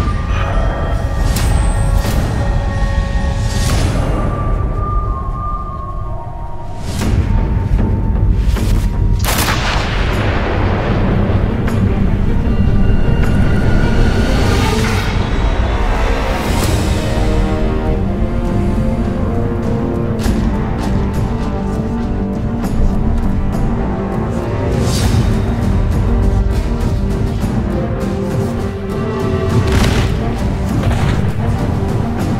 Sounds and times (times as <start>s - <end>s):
Soundtrack music: 0.0s - 32.3s.